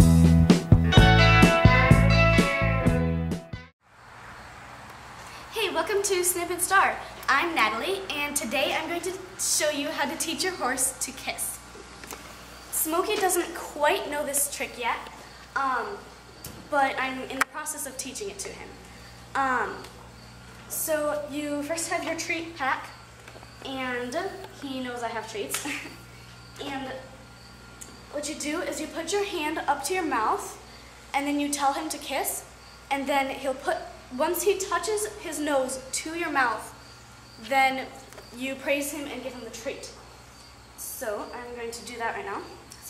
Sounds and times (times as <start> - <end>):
Speech: 5.5 - 11.6, 12.7 - 16.1, 16.7 - 18.8, 19.4 - 19.9, 20.7 - 22.9, 23.6 - 25.9, 26.6 - 27.1, 28.2 - 30.6, 31.2 - 36.8, 37.4 - 40.0, 40.8 - 42.9.